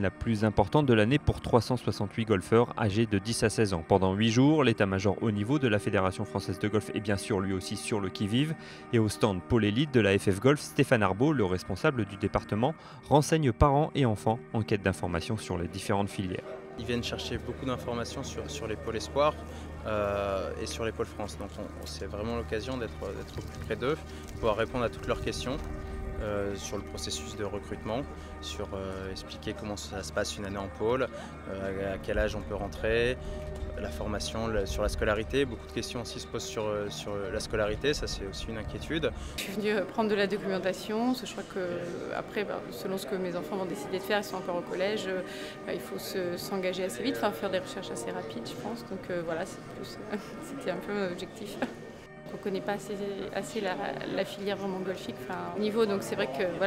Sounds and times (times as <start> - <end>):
Speech: 0.0 - 25.6, 26.2 - 33.2, 33.8 - 51.7, 52.4 - 56.6
Music: 0.0 - 56.6.